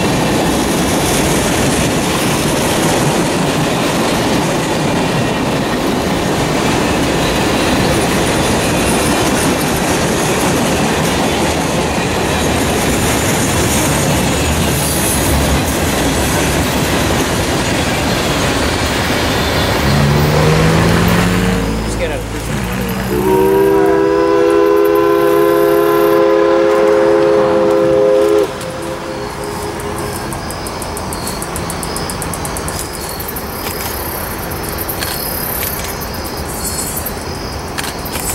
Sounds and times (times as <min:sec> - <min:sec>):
Steam whistle: 0:22.8 - 0:30.7.